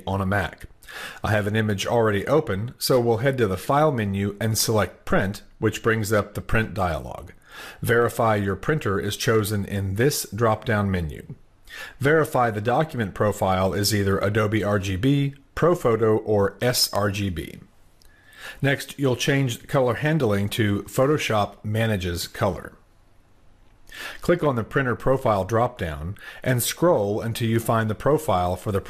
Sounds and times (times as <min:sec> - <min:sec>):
Speech: 0:00.0 - 0:11.4, 0:12.0 - 0:17.7, 0:18.6 - 0:22.8, 0:24.2 - 0:28.8.